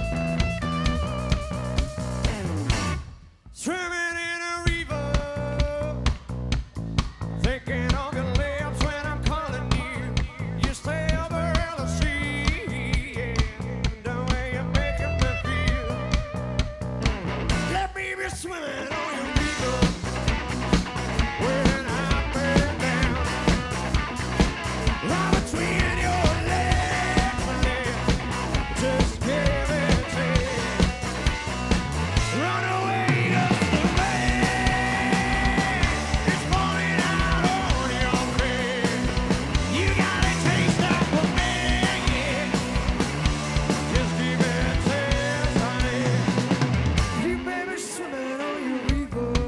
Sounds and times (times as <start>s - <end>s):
Music: 0.0s - 3.6s, 4.6s - 49.4s.